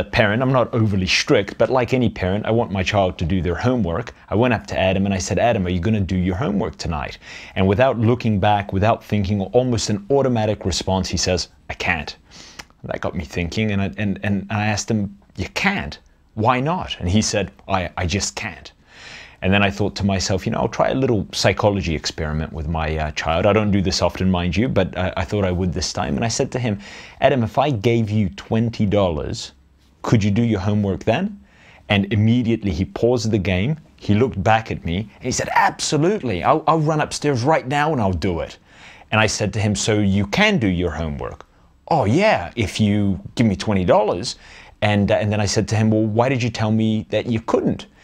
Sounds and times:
Speech: 0:00.0 - 0:12.2, 0:12.8 - 0:18.8, 0:19.4 - 0:47.9.

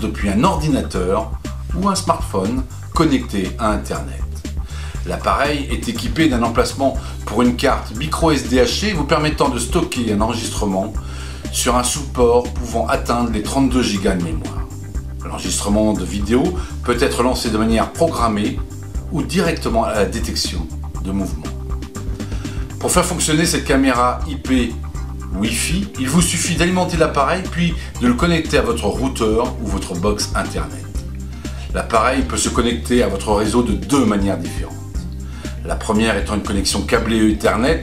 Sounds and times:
Speech: 0:00.0 - 0:04.4, 0:05.0 - 0:21.6, 0:22.8 - 0:31.0, 0:31.7 - 0:35.0, 0:35.6 - 0:37.8
Music: 0:00.0 - 0:37.8.

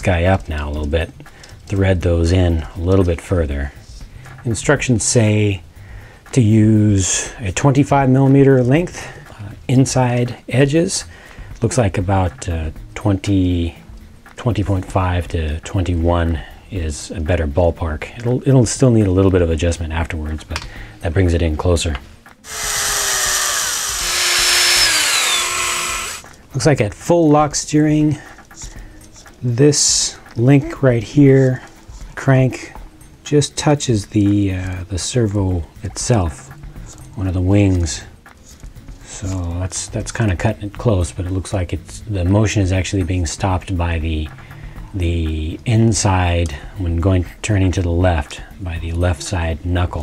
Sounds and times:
Speech: 0:00.0 - 0:05.6, 0:06.3 - 0:13.8, 0:14.4 - 0:22.0, 0:26.5 - 0:28.3, 0:29.4 - 0:36.6, 0:37.2 - 0:38.1, 0:39.0 - 0:44.4, 0:45.0 - 0:50.0
Inside, small room: 0:00.0 - 0:50.0
Drill: 0:22.5 - 0:26.2.

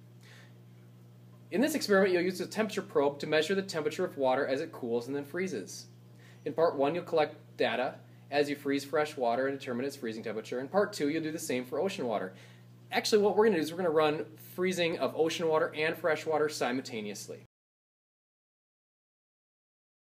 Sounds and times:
Speech: 0:01.5 - 0:17.5.

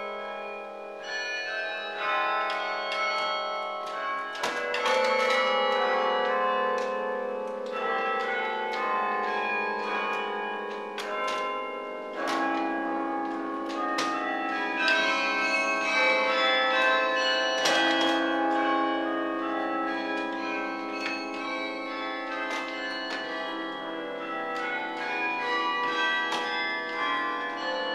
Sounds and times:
Tubular bells: 0:00.0 - 0:27.9.

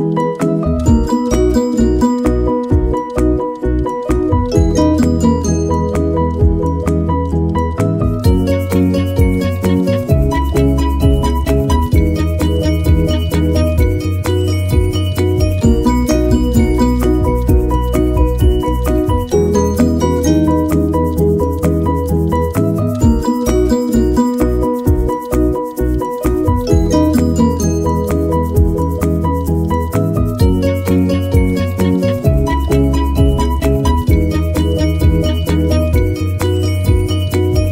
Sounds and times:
Music: 0:00.0 - 0:37.7.

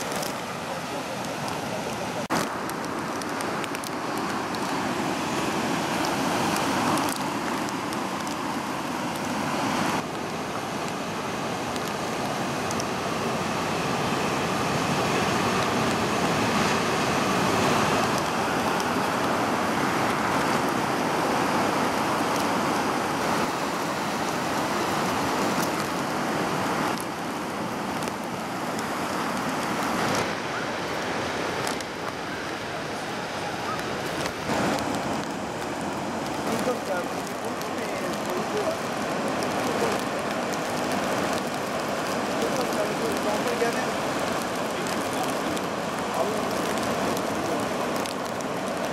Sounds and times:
Waves, surf: 0:00.0 - 0:48.9.

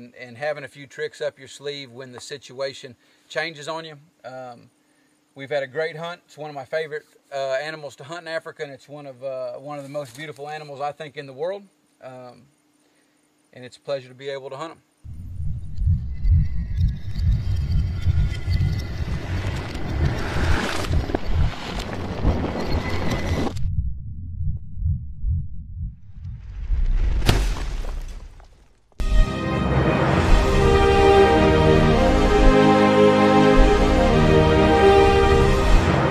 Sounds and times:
Speech: 0:00.0 - 0:04.7, 0:05.4 - 0:12.5, 0:13.5 - 0:14.8.

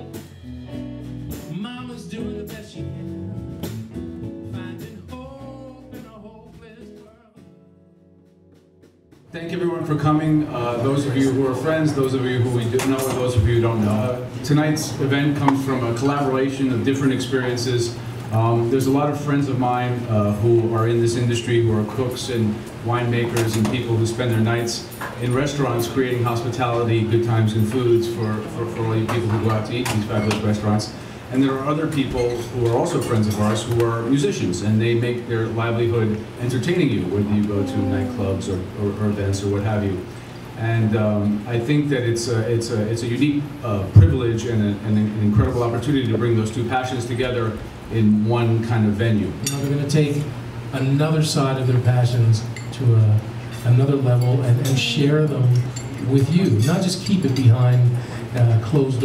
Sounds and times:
Speech: 0:09.3 - 0:59.0.

